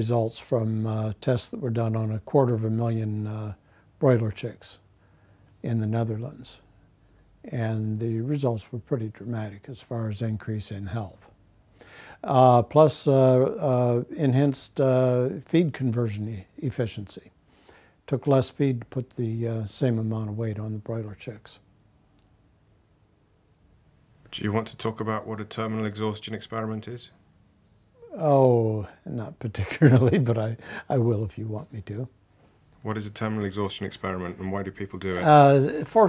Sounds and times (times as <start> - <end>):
Speech: 0.0 - 4.8, 5.6 - 6.6, 7.4 - 11.4, 12.2 - 17.4, 18.1 - 21.6, 24.3 - 27.2, 28.0 - 32.2, 32.8 - 36.0.